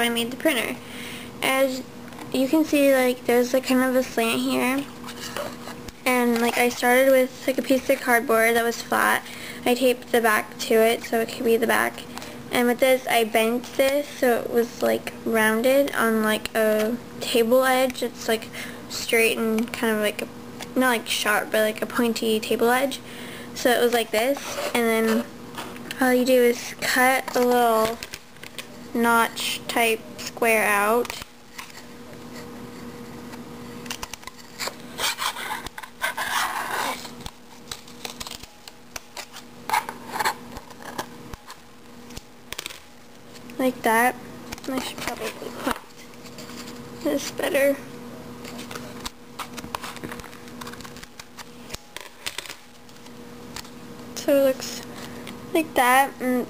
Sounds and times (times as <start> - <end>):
Speech: 0.0 - 0.8, 1.4 - 4.9, 6.0 - 23.0, 23.6 - 25.3, 26.0 - 28.0, 28.9 - 31.2, 43.6 - 45.8, 47.0 - 47.9, 54.2 - 54.8, 55.5 - 56.4.